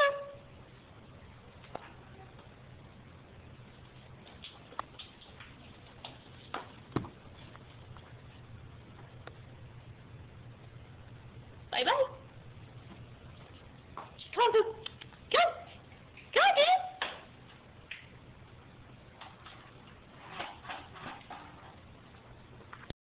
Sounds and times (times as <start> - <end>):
Speech: 11.7 - 12.3, 14.2 - 17.0.